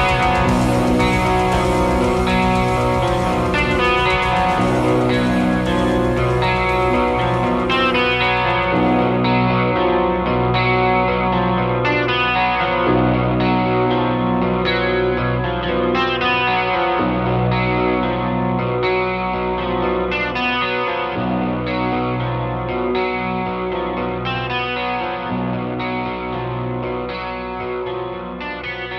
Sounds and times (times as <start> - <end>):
Chorus effect: 0.0 - 28.9
Music: 0.0 - 28.9.